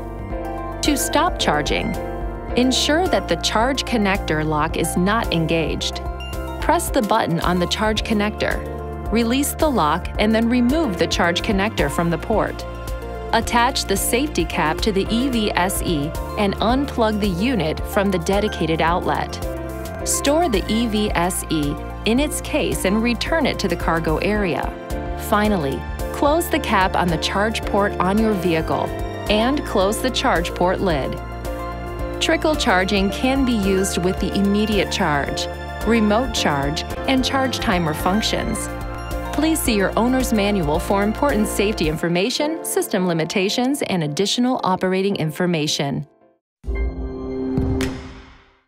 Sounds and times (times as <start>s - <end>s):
Music: 0.0s - 48.6s
Speech: 0.9s - 2.0s, 2.6s - 6.0s, 6.6s - 12.6s, 13.4s - 19.4s, 20.1s - 31.2s, 32.2s - 38.7s, 39.4s - 46.1s.